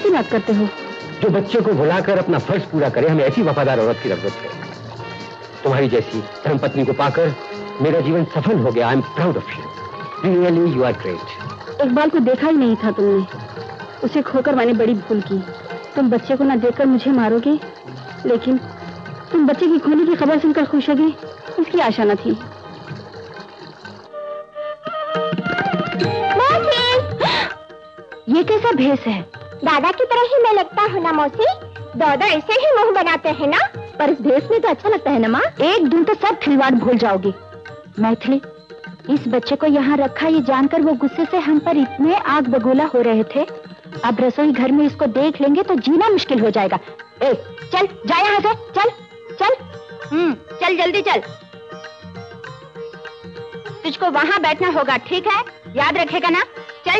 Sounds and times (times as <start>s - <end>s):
Carnatic music: 0.0s - 56.9s.